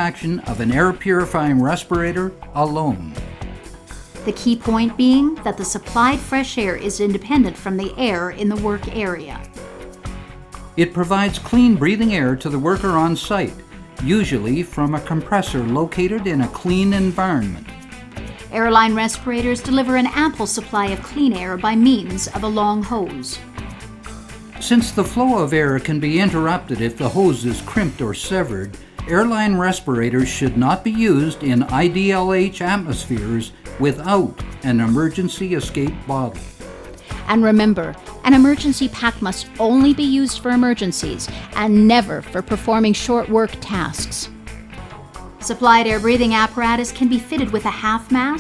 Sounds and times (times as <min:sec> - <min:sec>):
Speech: 0:00.0 - 0:03.2, 0:04.3 - 0:09.4, 0:10.8 - 0:17.6, 0:18.5 - 0:23.4, 0:24.6 - 0:36.4, 0:37.3 - 0:44.3, 0:45.4 - 0:48.4
Music: 0:00.0 - 0:48.4.